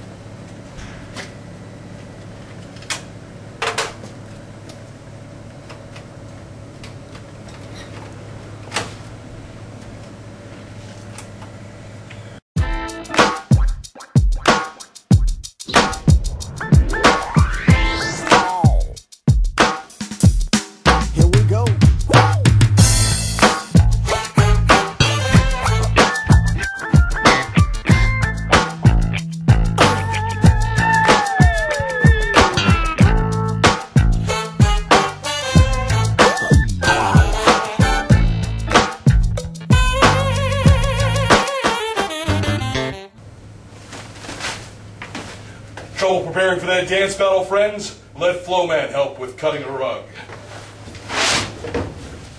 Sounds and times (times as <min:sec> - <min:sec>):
Music: 0:12.6 - 0:43.2.